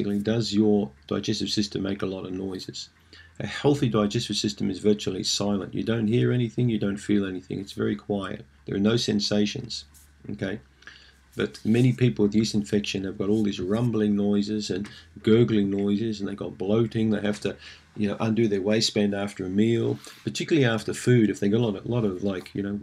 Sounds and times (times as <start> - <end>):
Speech: 0.0 - 10.7, 11.4 - 22.8.